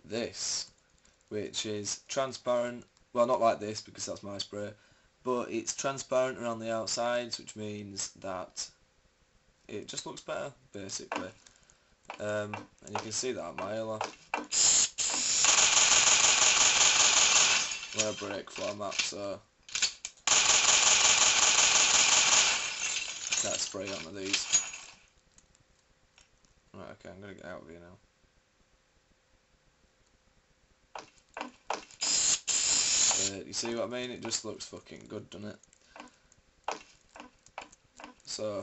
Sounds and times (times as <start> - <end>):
Speech: 0.0 - 0.7, 1.3 - 8.8, 9.7 - 11.4, 12.2 - 14.1, 18.0 - 19.5, 23.4 - 24.5, 26.7 - 28.0, 33.2 - 35.6, 38.3 - 38.6.